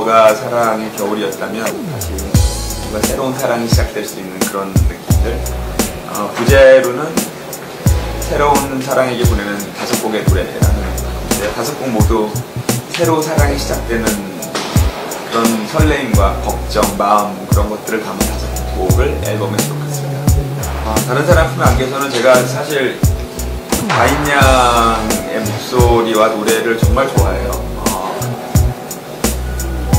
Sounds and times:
Speech: 0.0 - 2.0, 2.9 - 7.3, 8.2 - 14.5, 15.3 - 20.0, 20.8 - 23.1, 23.8 - 28.4
Music: 0.0 - 29.9.

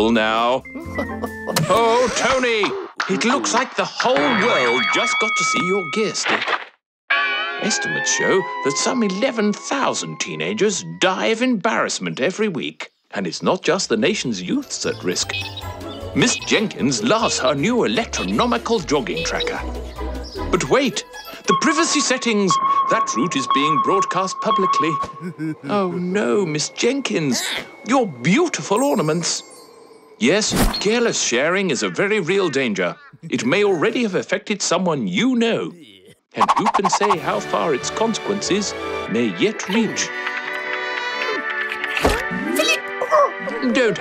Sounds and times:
Speech: 1.6 - 6.2, 7.6 - 15.2, 16.2 - 19.6, 20.6 - 29.4, 30.2 - 40.1.

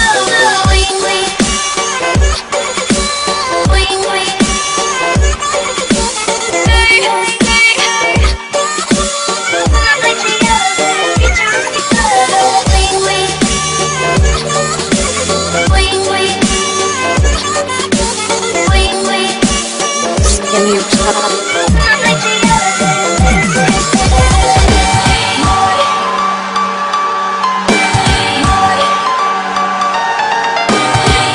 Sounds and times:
Dubstep: 0.0 - 26.1.

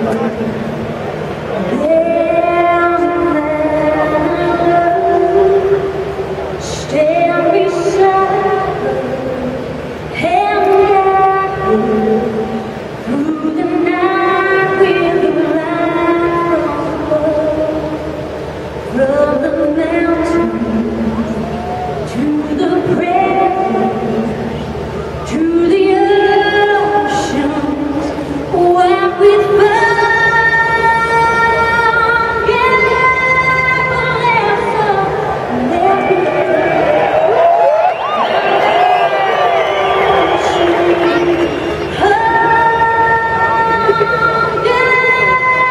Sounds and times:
Female singing: 1.7 - 6.0, 6.6 - 18.0, 18.9 - 24.6, 25.2 - 37.1, 40.2 - 45.7.

